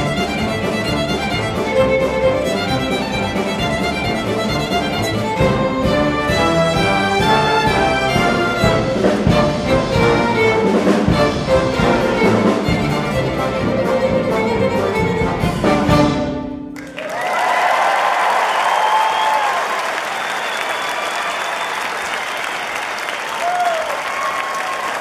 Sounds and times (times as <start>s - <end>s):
Violin, fiddle: 0.0s - 16.4s
Orchestra: 0.0s - 25.0s.